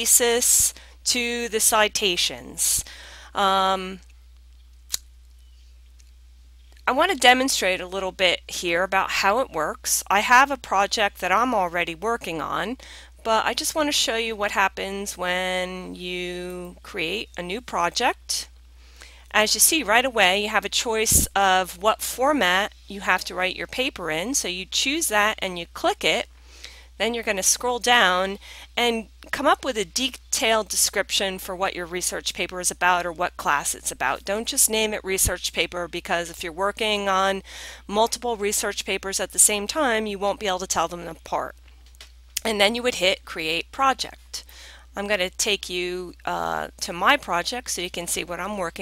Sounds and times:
Speech: 0.0 - 4.0, 6.9 - 18.5, 19.3 - 26.3, 27.0 - 41.5, 42.4 - 44.4, 45.0 - 48.8.

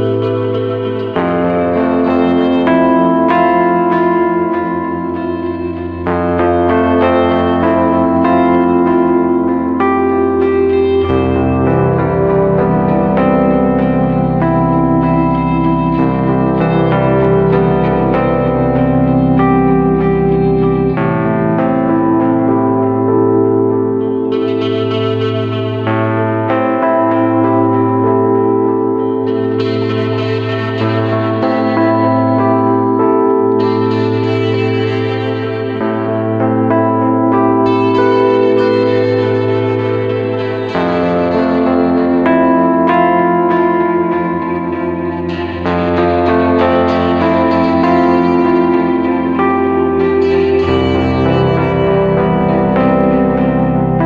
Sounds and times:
Music: 0.0 - 54.0.

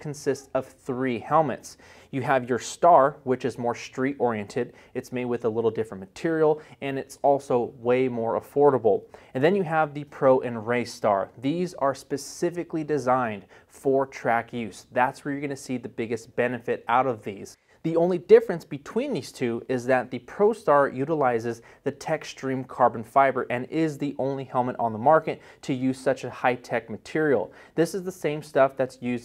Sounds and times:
Speech: 0.0 - 29.2.

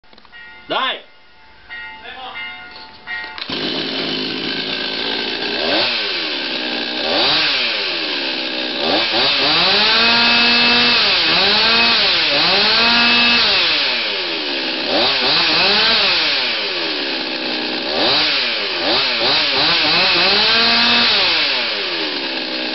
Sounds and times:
Speech: 0.7 - 1.1, 2.0 - 2.4
Chainsaw: 3.4 - 22.7.

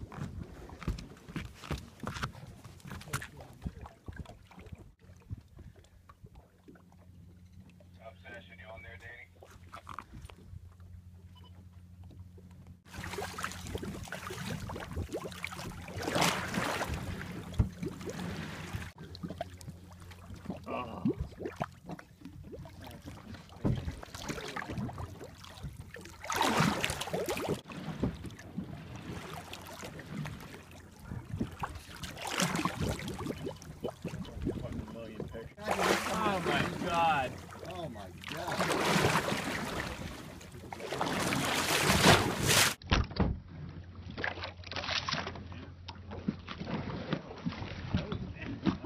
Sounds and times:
Rowboat, canoe, kayak: 0.0 - 48.8.

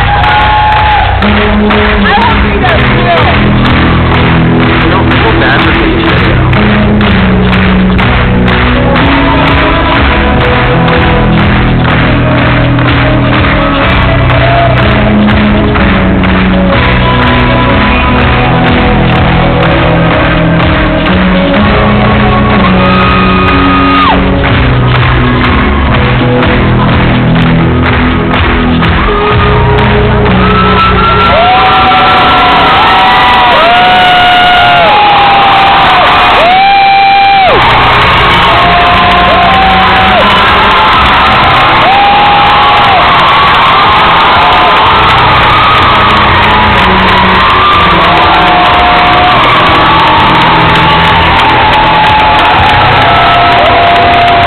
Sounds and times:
Cheering: 0.0 - 54.4
Music: 0.0 - 54.4.

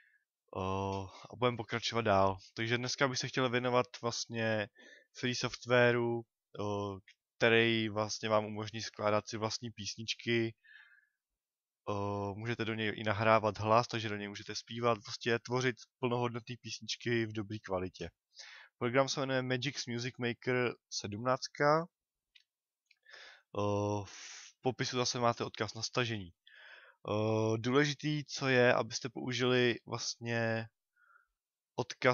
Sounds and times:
Speech: 0.5 - 10.6, 11.8 - 18.2, 18.8 - 22.0, 23.5 - 26.4, 27.0 - 30.8, 31.8 - 32.1.

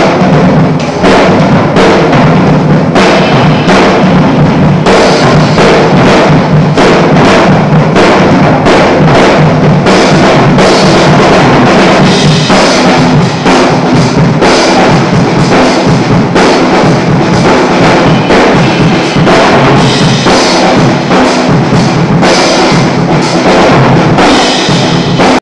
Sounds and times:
Music: 0.0 - 25.4.

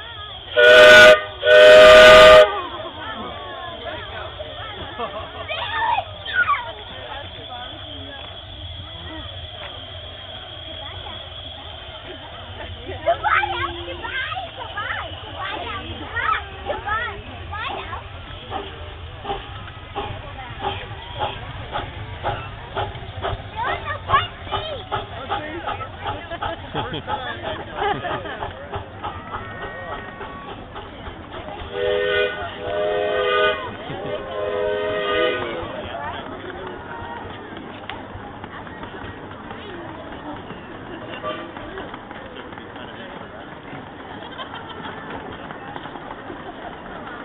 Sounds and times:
Speech: 10.6 - 19.0, 19.9 - 32.8, 35.2 - 47.2.

